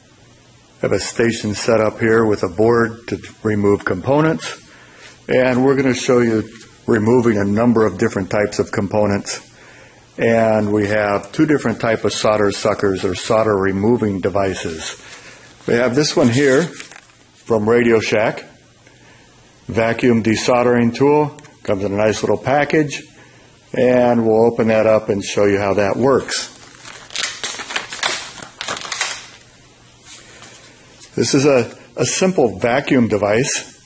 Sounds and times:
Speech: 0:00.8 - 0:04.7, 0:05.3 - 0:09.5, 0:10.2 - 0:15.0, 0:15.6 - 0:18.6, 0:19.7 - 0:26.6, 0:31.1 - 0:33.8.

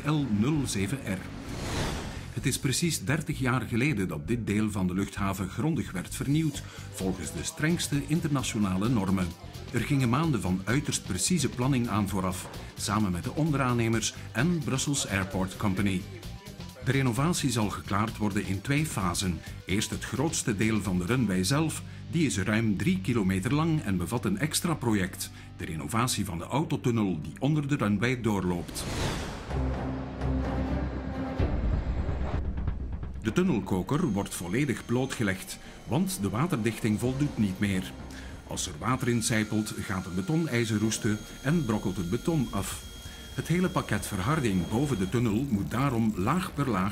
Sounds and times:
Speech: 0:00.0 - 0:01.3, 0:02.4 - 0:28.9, 0:33.2 - 0:46.9
Music: 0:00.0 - 0:46.9.

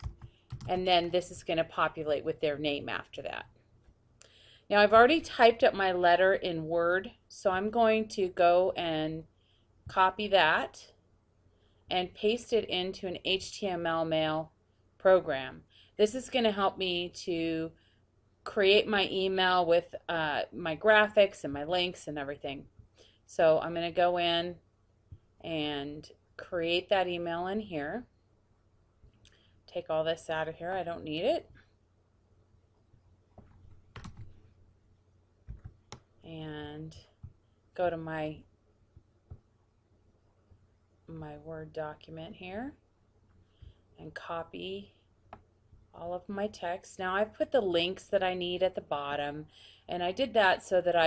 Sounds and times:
Speech: 0:00.7 - 0:03.5, 0:04.7 - 0:09.3, 0:09.9 - 0:10.9, 0:11.9 - 0:17.7, 0:18.5 - 0:22.7, 0:23.3 - 0:24.6, 0:25.4 - 0:28.1, 0:29.7 - 0:31.5, 0:36.3 - 0:37.0, 0:37.8 - 0:38.4, 0:41.1 - 0:42.8, 0:44.0 - 0:44.9, 0:46.0 - 0:51.0.

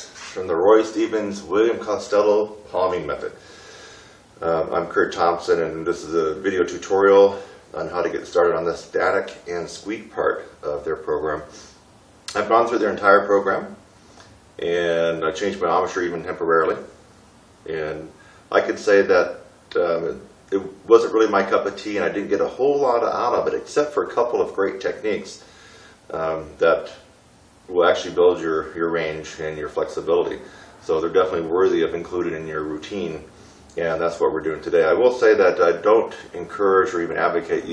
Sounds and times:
Speech: 0:00.0 - 0:03.4, 0:04.4 - 0:11.6, 0:12.3 - 0:13.8, 0:14.6 - 0:17.0, 0:17.6 - 0:25.5, 0:26.1 - 0:27.1, 0:27.7 - 0:37.7.

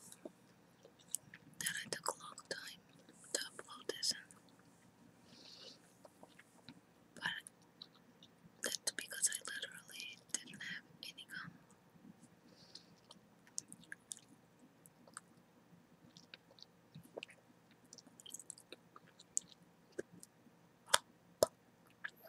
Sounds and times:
Whispering: 0:01.6 - 0:04.4, 0:07.2 - 0:07.5, 0:08.6 - 0:11.6.

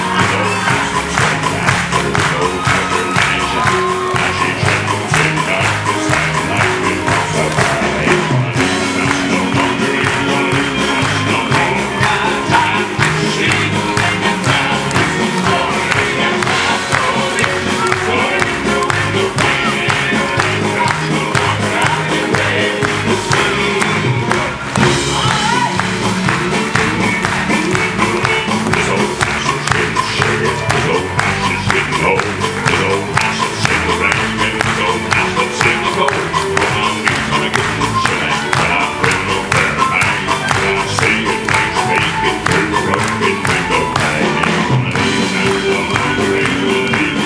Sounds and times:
Crowd: 0:00.0 - 0:47.2.

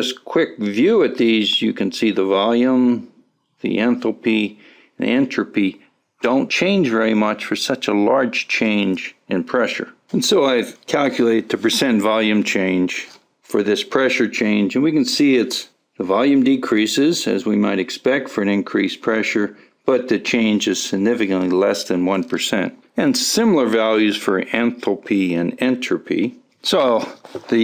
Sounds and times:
Speech: 0:00.0 - 0:27.6.

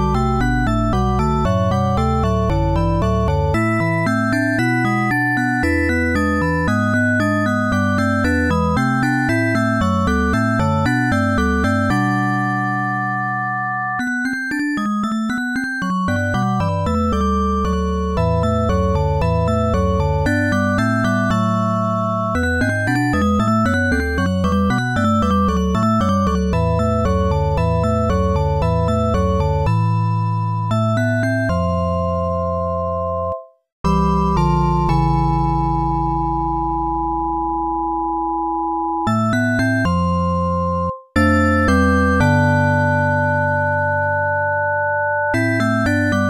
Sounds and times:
Video game music: 0:00.0 - 0:38.0, 0:39.0 - 0:44.1.

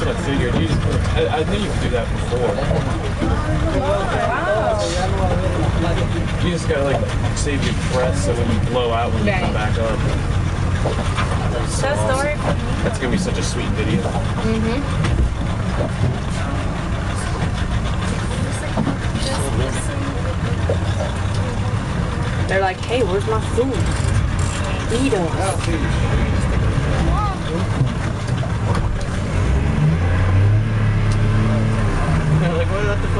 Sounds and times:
Vehicle: 0:00.0 - 0:33.1.

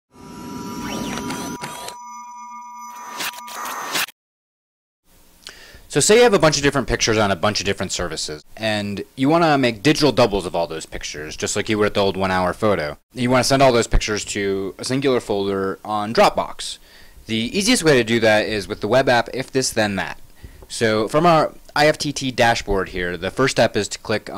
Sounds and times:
Speech: 0:05.9 - 0:24.3.

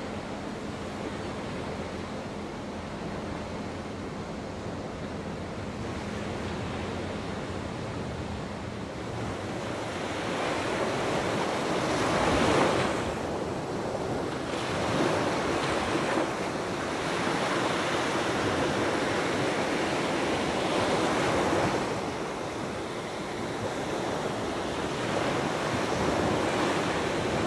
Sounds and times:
Waves, surf: 0:00.0 - 0:27.4
Wind: 0:00.0 - 0:27.4.

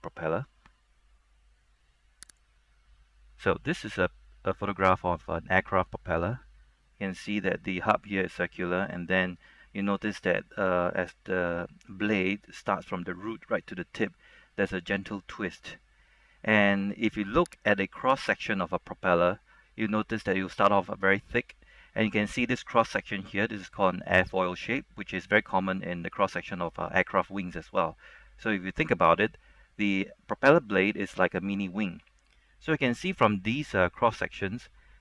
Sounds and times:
Narration, monologue: 0:00.0 - 0:35.0.

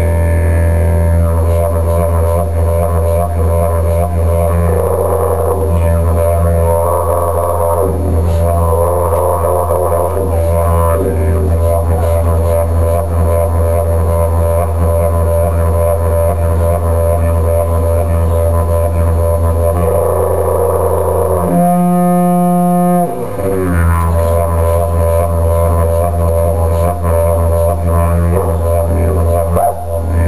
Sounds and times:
Didgeridoo: 0:00.0 - 0:30.2.

